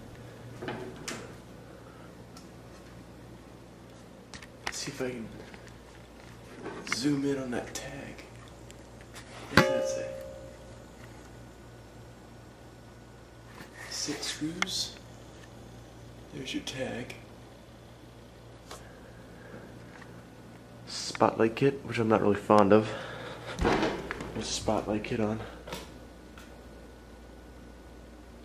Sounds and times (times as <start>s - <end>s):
Speech: 4.7s - 5.5s, 6.8s - 8.3s, 13.8s - 15.0s, 16.3s - 17.3s, 20.9s - 23.0s, 24.4s - 25.6s.